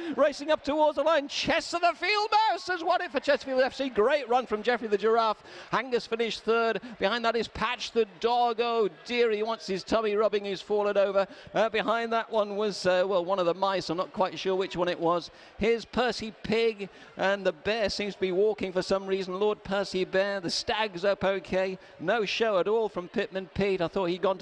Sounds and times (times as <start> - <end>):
Speech: 0.1 - 24.4.